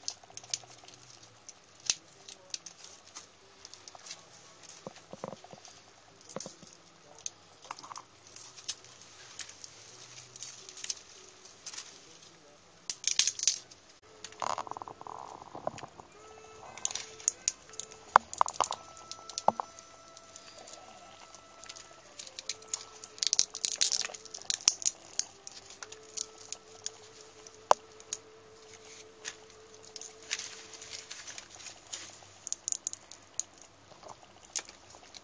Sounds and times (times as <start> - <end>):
Music: 0.0 - 35.2.